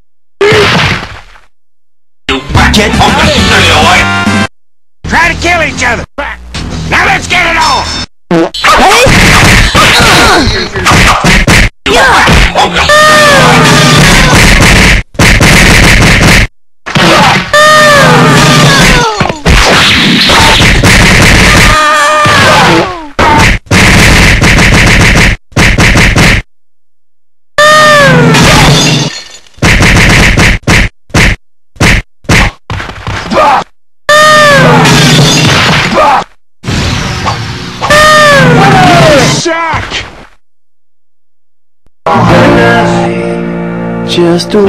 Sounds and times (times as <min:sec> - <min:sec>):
Speech: 0:02.3 - 0:04.0, 0:05.1 - 0:07.9, 0:44.1 - 0:44.6
Music: 0:02.3 - 0:04.5, 0:06.5 - 0:08.0, 0:42.1 - 0:44.6.